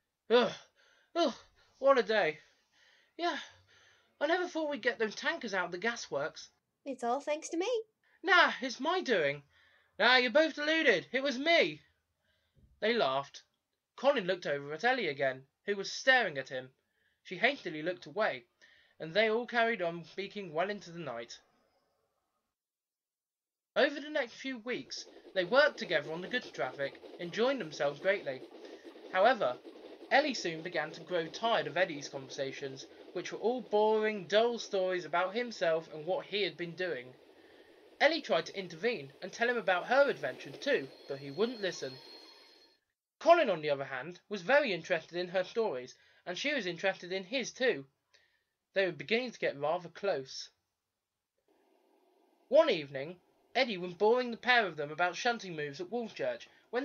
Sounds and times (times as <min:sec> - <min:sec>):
Speech: 0:00.3 - 0:02.4, 0:03.2 - 0:03.5, 0:04.2 - 0:09.4, 0:10.0 - 0:11.8, 0:12.8 - 0:16.7, 0:17.3 - 0:21.4, 0:23.8 - 0:28.4, 0:29.1 - 0:37.1, 0:38.0 - 0:42.0, 0:43.2 - 0:47.9, 0:48.8 - 0:50.6, 0:52.5 - 0:56.8.